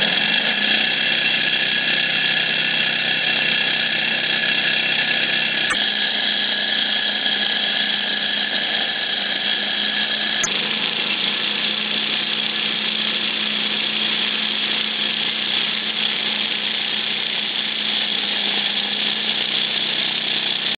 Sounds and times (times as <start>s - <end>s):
Engine: 0.0s - 20.7s.